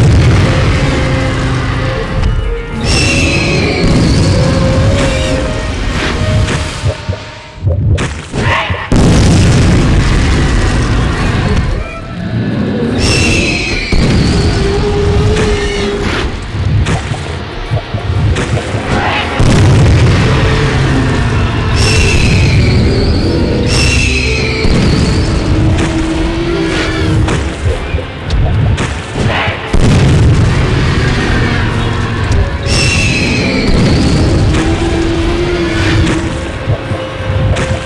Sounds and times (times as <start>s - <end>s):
Music: 0.0s - 37.8s.